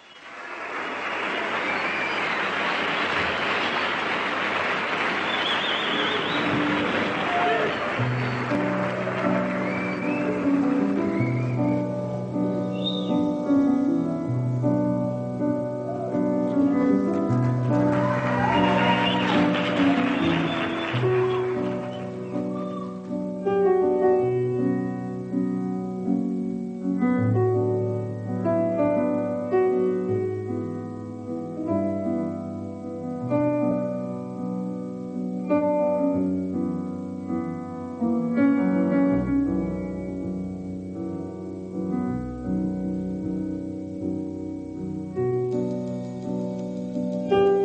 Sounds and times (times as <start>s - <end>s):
Music: 0.0s - 47.6s.